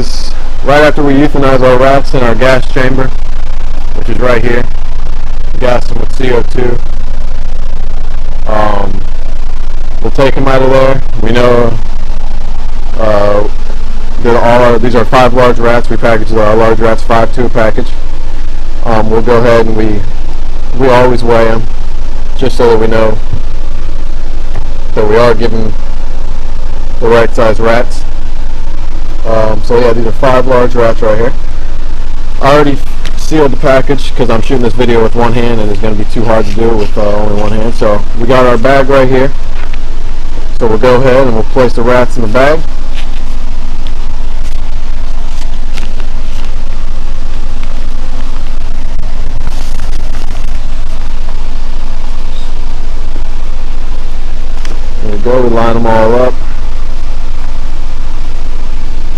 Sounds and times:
Speech: 0.0 - 3.1, 4.0 - 4.7, 5.6 - 6.8, 8.5 - 9.0, 10.0 - 11.8, 13.0 - 13.5, 14.2 - 17.9, 18.8 - 20.0, 20.8 - 21.6, 22.4 - 23.2, 25.0 - 25.8, 27.0 - 28.0, 29.2 - 31.4, 32.4 - 39.4, 40.6 - 42.6, 55.0 - 56.4.

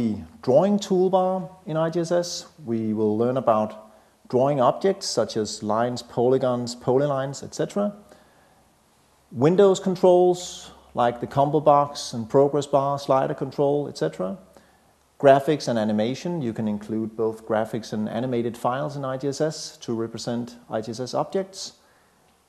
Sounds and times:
Speech: 0.0 - 8.1, 9.3 - 14.5, 15.2 - 21.8.

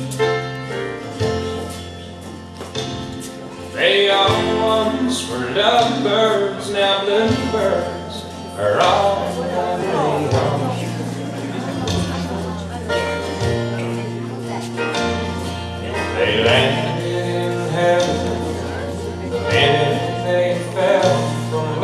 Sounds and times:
Country: 0.0 - 21.8
Speech: 3.8 - 21.8.

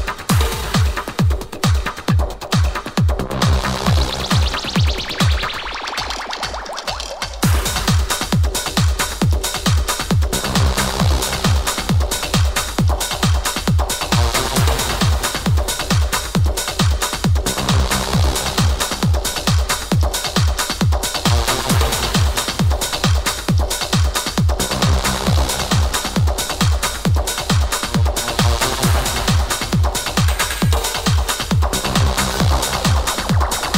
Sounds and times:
Music: 0.0 - 33.7.

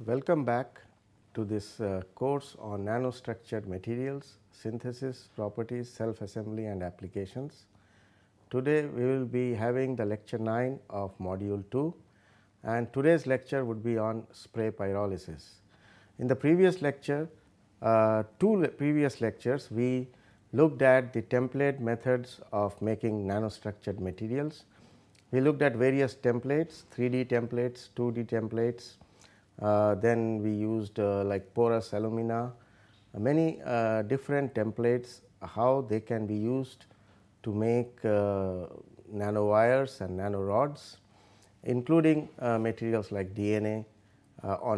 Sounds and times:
Speech: 0.0 - 7.7, 8.5 - 12.0, 12.6 - 15.6, 16.2 - 29.0, 29.6 - 41.0, 41.6 - 44.7.

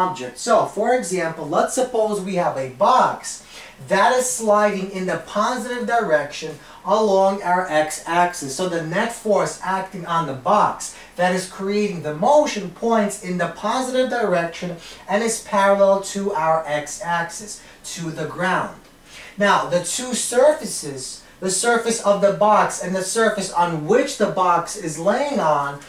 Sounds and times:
Speech: 0.0 - 25.8.

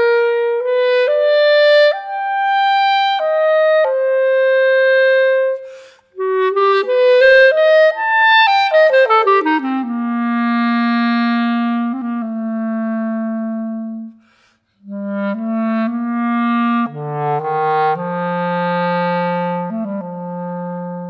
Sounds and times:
Clarinet: 0.0 - 21.0.

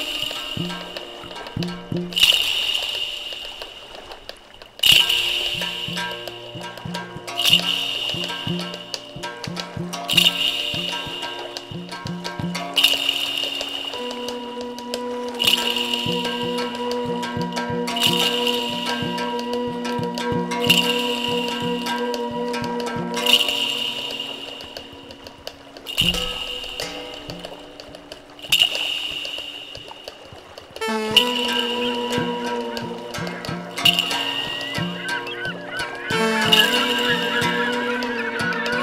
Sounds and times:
Music: 0.0 - 38.8.

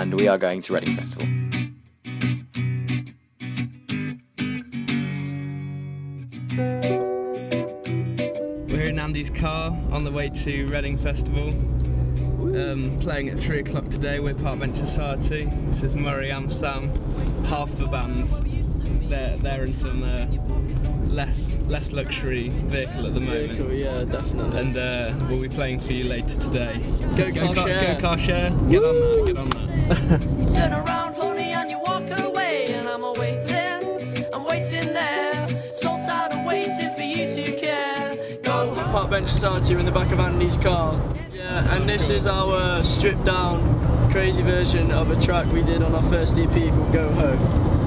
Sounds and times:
Car: 8.6 - 31.1, 38.6 - 47.8.

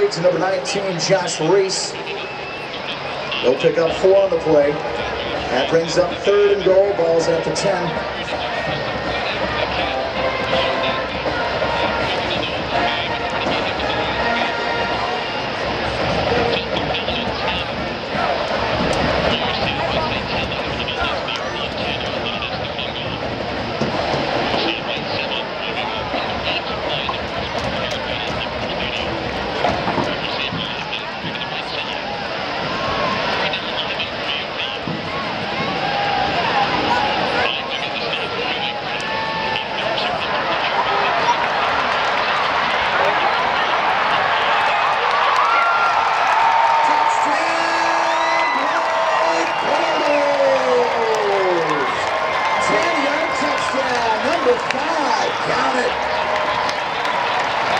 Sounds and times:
Speech: 0.0 - 18.5, 19.1 - 23.3, 24.5 - 32.1, 32.9 - 35.7, 36.3 - 45.4, 46.6 - 57.7.

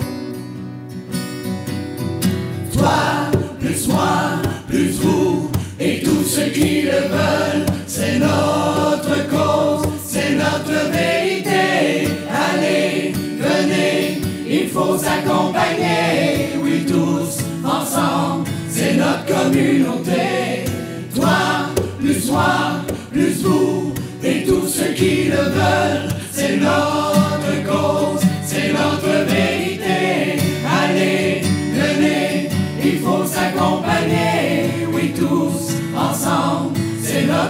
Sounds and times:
A capella: 2.6 - 37.5
Singing: 2.7 - 37.5.

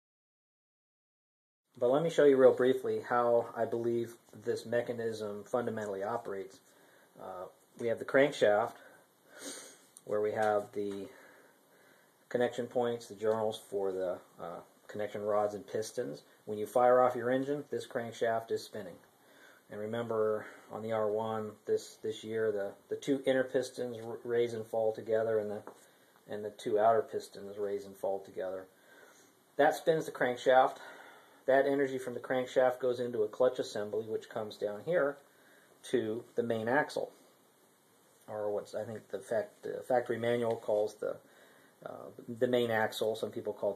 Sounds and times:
Speech: 1.8 - 9.0, 10.0 - 11.2, 12.3 - 19.1, 19.7 - 28.8, 29.6 - 37.2, 38.3 - 43.7.

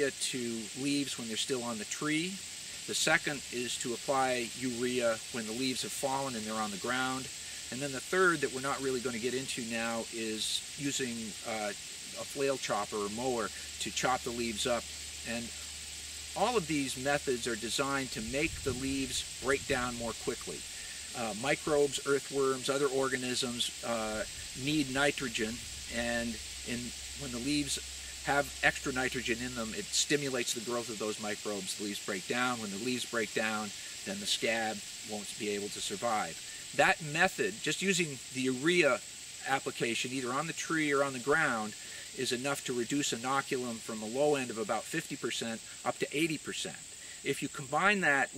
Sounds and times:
Speech: 0.0 - 15.5, 16.4 - 48.3.

